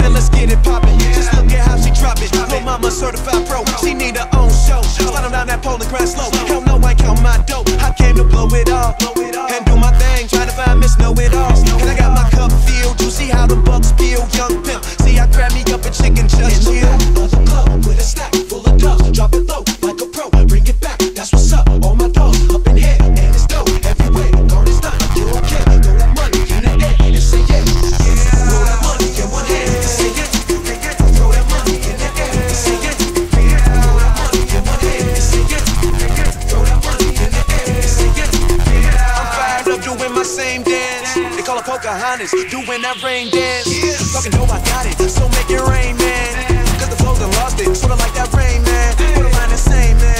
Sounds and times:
Dubstep: 0:00.0 - 0:50.1.

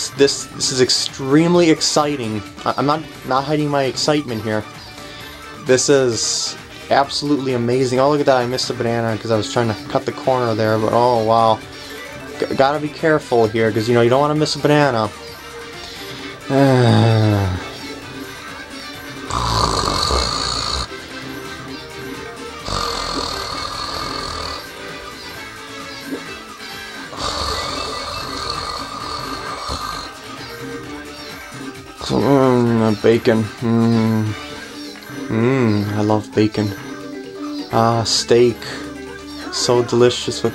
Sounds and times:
Music: 0:00.0 - 0:40.5.

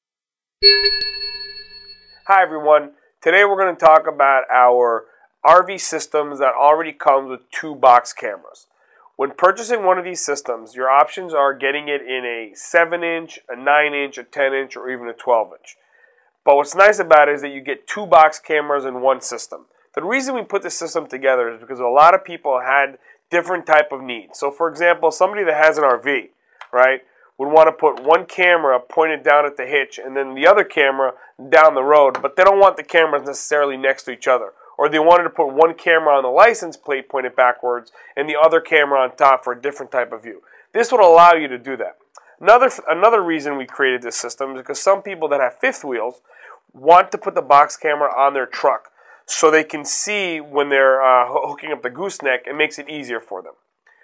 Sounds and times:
Speech: 0:02.3 - 0:08.6, 0:09.2 - 0:15.7, 0:16.5 - 0:53.6.

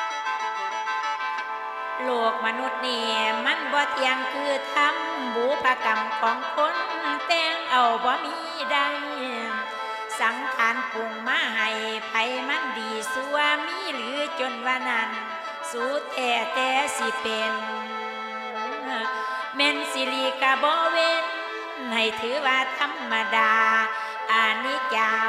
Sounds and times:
Traditional music: 0:00.0 - 0:25.2.

